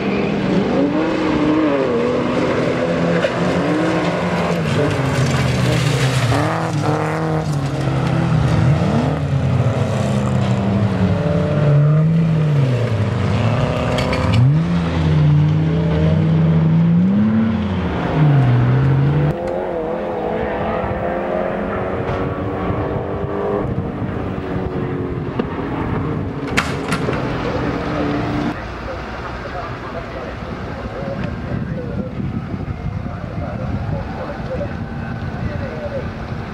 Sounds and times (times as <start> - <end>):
Accelerating, revving, vroom: 0.0 - 28.6
Car: 0.0 - 36.5
Medium engine (mid frequency): 0.0 - 36.5.